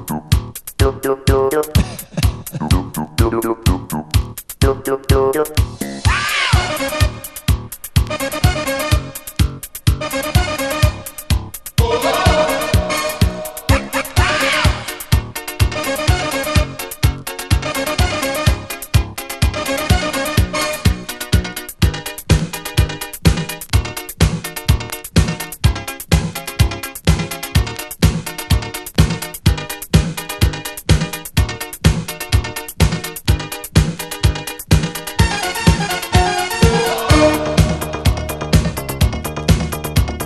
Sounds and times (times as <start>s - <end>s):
Music: 0.0s - 40.2s.